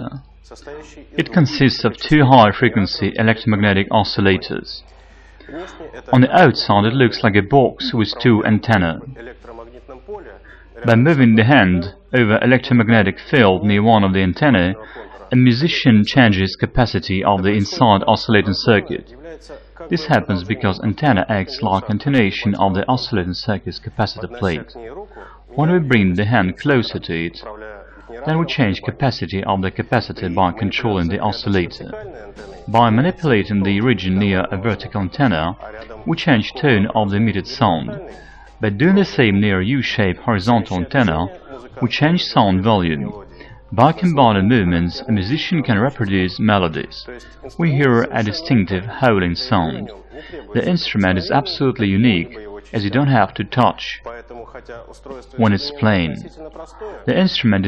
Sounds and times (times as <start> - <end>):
Speech: 0.0 - 57.6.